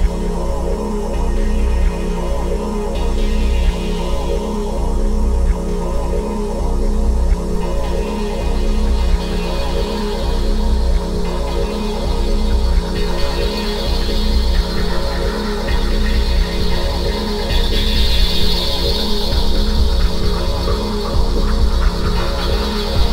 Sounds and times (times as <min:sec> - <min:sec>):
Music: 0:00.0 - 0:23.1.